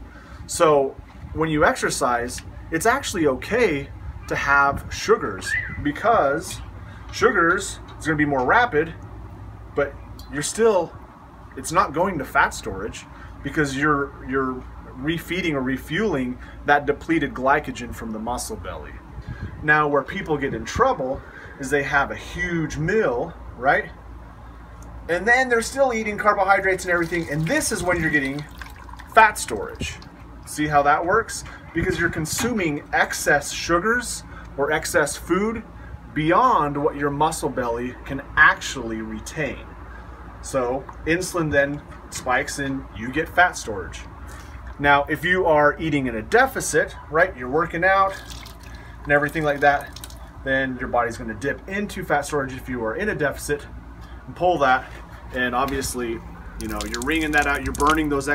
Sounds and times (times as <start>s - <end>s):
Speech: 0.5s - 9.0s, 9.8s - 11.0s, 11.6s - 19.0s, 19.6s - 24.0s, 25.1s - 28.5s, 29.1s - 39.7s, 40.4s - 44.1s, 44.8s - 48.2s, 49.1s - 53.7s, 54.3s - 58.3s.